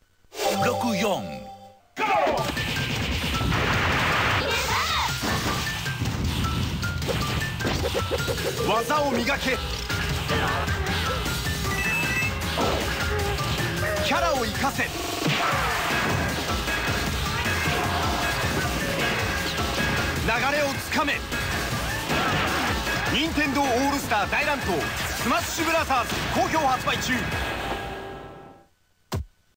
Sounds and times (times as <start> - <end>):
Music: 0.4 - 28.7
Speech: 8.6 - 9.6, 23.1 - 27.3.